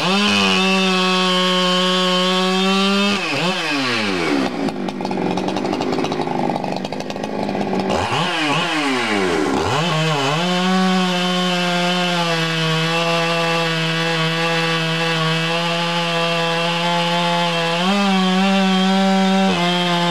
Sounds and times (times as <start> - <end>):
Power tool: 0.0 - 20.1.